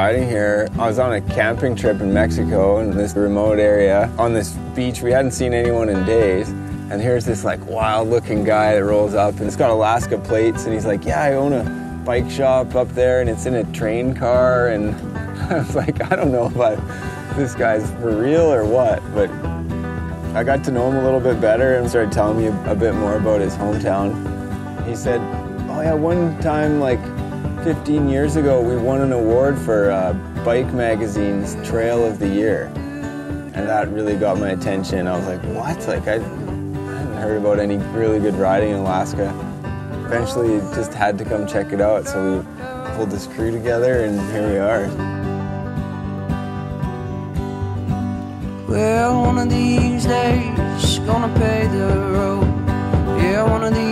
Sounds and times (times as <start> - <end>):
Speech: 0.0 - 19.4, 20.4 - 24.2, 24.8 - 32.9, 33.5 - 39.4, 40.1 - 45.0, 48.7 - 52.4, 53.2 - 53.9
Music: 0.0 - 53.9.